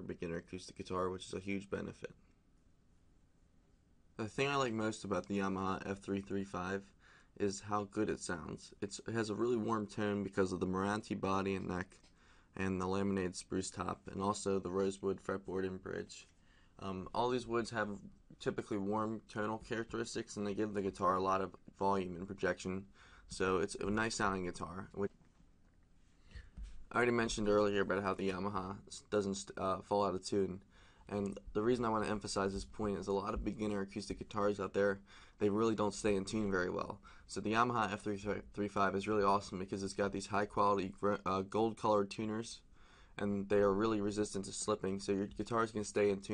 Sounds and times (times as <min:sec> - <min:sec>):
Speech: 0:00.0 - 0:02.2, 0:04.2 - 0:12.0, 0:12.6 - 0:25.2, 0:26.9 - 0:46.3.